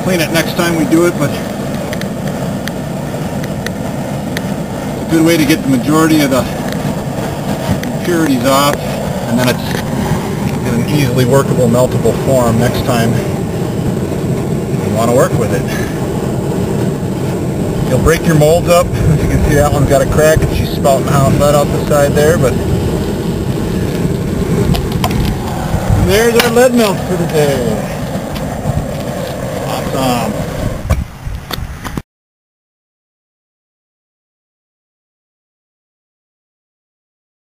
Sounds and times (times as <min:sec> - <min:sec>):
Speech: 0:00.0 - 0:01.5, 0:05.1 - 0:06.6, 0:08.0 - 0:09.8, 0:10.6 - 0:13.4, 0:14.8 - 0:16.0, 0:17.9 - 0:22.6, 0:26.0 - 0:28.0, 0:29.6 - 0:30.4.